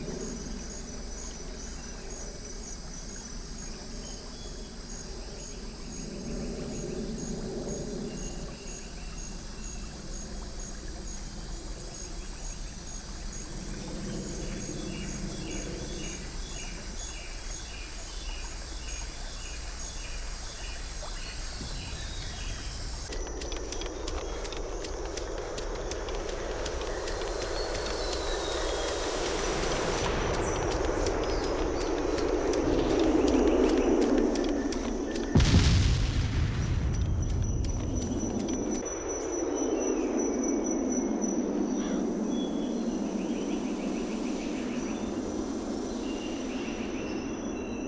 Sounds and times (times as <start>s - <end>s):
Outside, rural or natural: 0.0s - 47.8s.